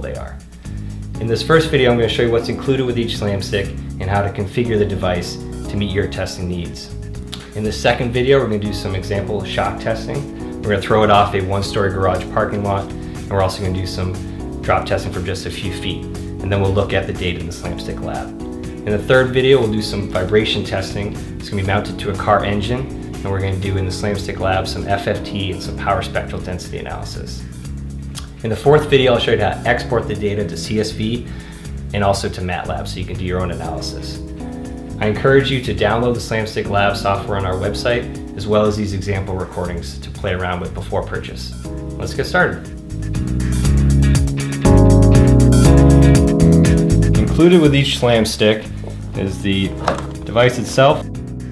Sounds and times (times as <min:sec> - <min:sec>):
Speech: 0:00.0 - 0:00.4, 0:01.2 - 0:06.9, 0:07.5 - 0:27.4, 0:28.2 - 0:31.3, 0:31.9 - 0:34.2, 0:35.0 - 0:42.7, 0:47.2 - 0:51.1
Music: 0:00.0 - 0:51.5.